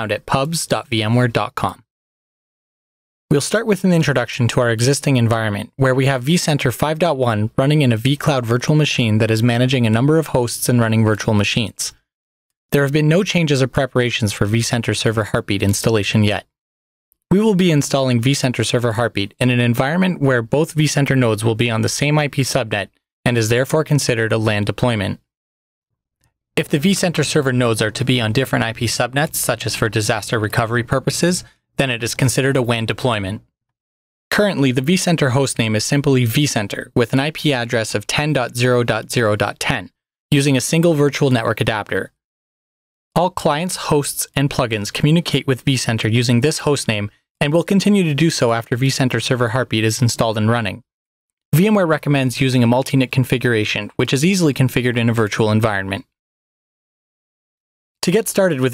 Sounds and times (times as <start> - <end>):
Speech: 0.0 - 1.9, 3.3 - 12.0, 12.7 - 16.6, 17.3 - 25.3, 26.6 - 33.4, 34.3 - 42.2, 43.2 - 50.9, 51.5 - 56.2, 58.0 - 58.7.